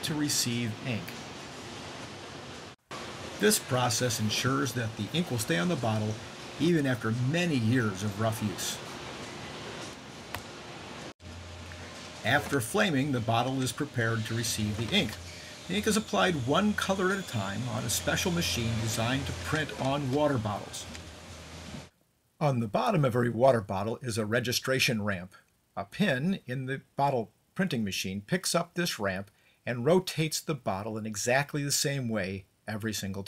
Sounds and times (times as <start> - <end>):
Speech: 0.0 - 1.2, 3.4 - 8.8, 12.2 - 20.9, 22.4 - 33.2.